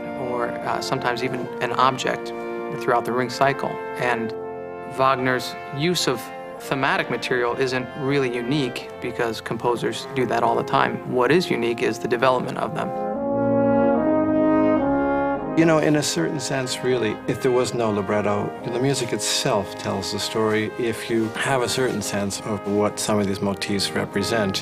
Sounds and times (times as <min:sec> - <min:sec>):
Brass instrument: 0:00.0 - 0:24.6.